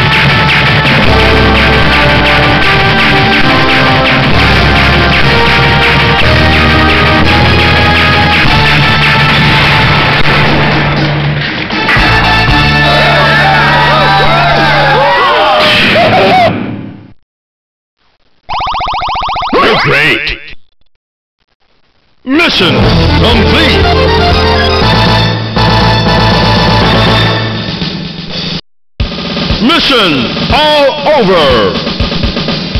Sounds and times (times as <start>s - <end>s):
Music: 0.0s - 16.5s, 22.6s - 32.7s
Speech: 19.6s - 20.6s, 22.3s - 23.9s, 29.6s - 31.9s.